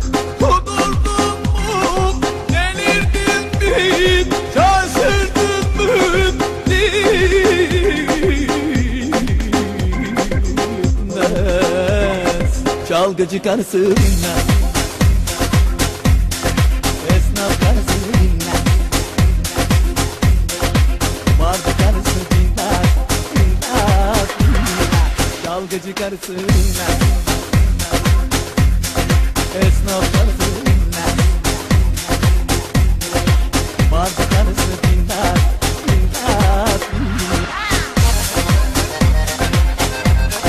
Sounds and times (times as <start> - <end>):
Techno: 0.0 - 40.4.